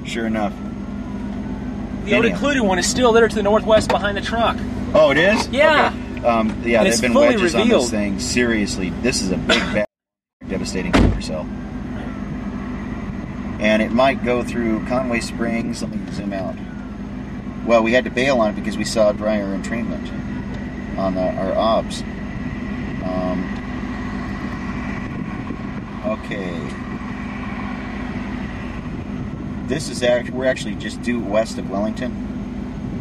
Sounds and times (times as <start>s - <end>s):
Speech: 0.0s - 0.6s, 2.1s - 12.2s, 13.6s - 16.6s, 17.7s - 20.2s, 21.0s - 22.1s, 23.0s - 23.5s, 26.0s - 26.8s, 29.7s - 32.2s
Outside, rural or natural: 0.0s - 33.0s.